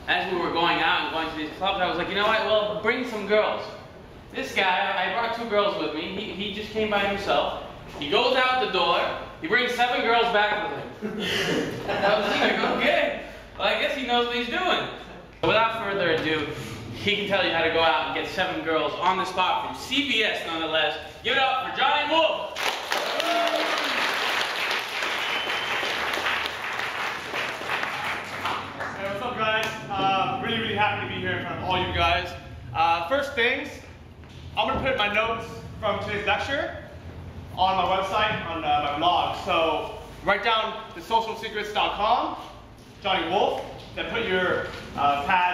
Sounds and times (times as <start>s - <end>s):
Male speech, man speaking: 0.1s - 11.0s, 11.9s - 22.5s, 28.9s - 34.0s, 34.6s - 36.9s, 37.6s - 45.5s.